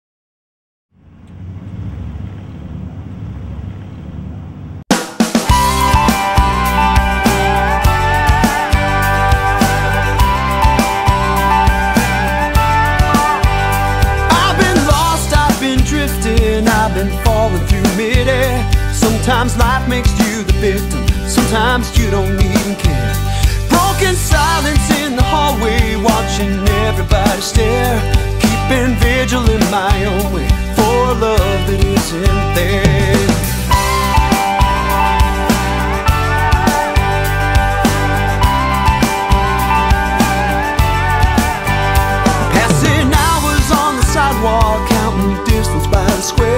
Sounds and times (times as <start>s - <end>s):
Music: 4.9s - 46.5s.